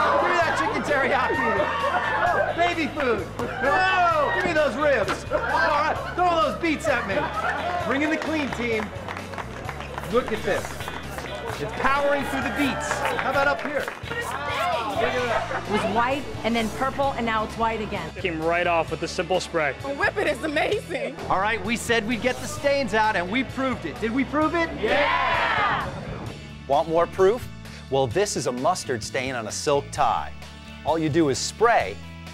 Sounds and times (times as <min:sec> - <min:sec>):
Music: 0:00.0 - 0:32.3.